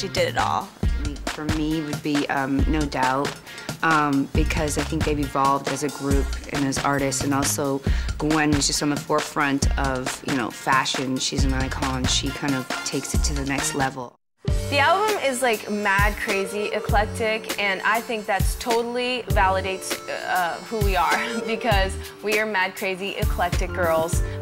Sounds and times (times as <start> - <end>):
Speech: 0.0 - 24.2
Exciting music: 4.3 - 24.4.